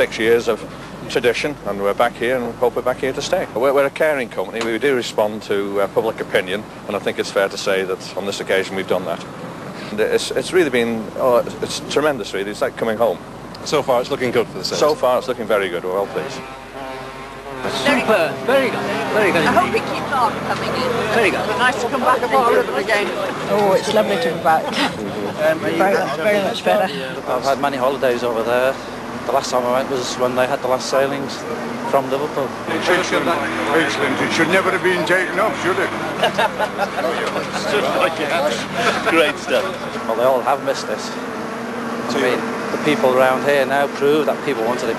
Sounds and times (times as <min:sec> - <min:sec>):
Speech: 0:00.0 - 0:09.2, 0:09.9 - 0:16.4, 0:37.0 - 0:41.2, 0:42.1 - 0:44.9.